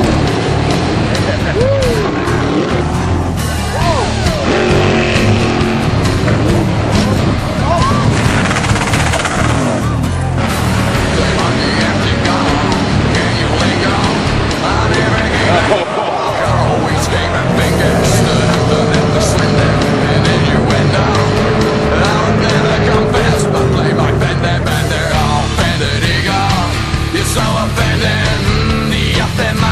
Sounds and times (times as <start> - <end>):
Motorboat, speedboat: 0.0 - 29.7
Music: 0.0 - 29.7.